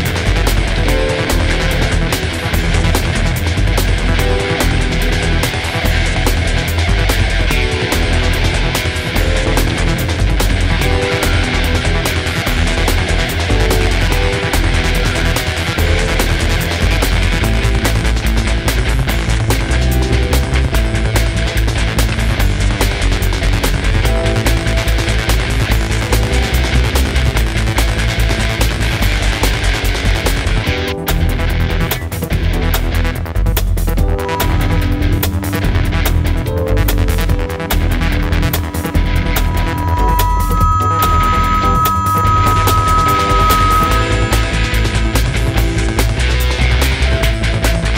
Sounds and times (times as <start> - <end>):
Video game music: 34.0 - 47.9.